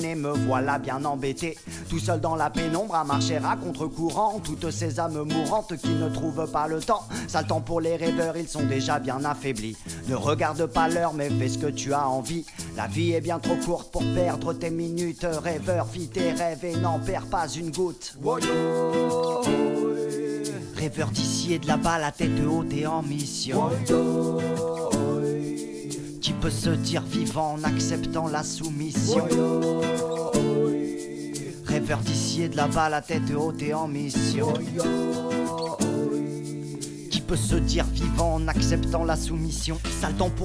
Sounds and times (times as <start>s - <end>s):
Music: 0.0s - 40.4s.